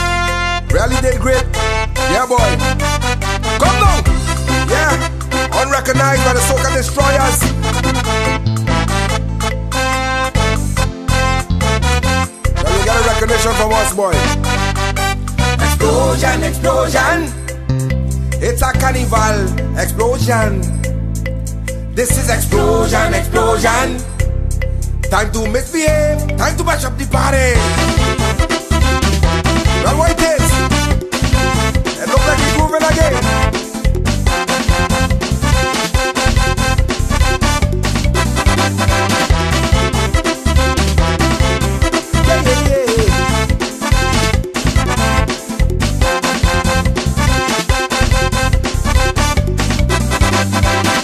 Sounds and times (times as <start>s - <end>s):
Music: 0.0s - 51.0s.